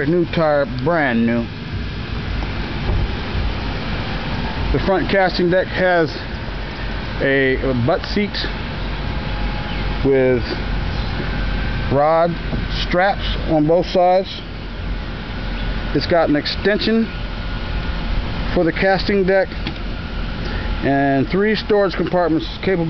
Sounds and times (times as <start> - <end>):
Speech: 0.0 - 1.5, 4.7 - 6.3, 7.2 - 8.6, 10.0 - 10.6, 11.9 - 14.5, 15.9 - 17.1, 18.5 - 19.6, 20.8 - 22.9.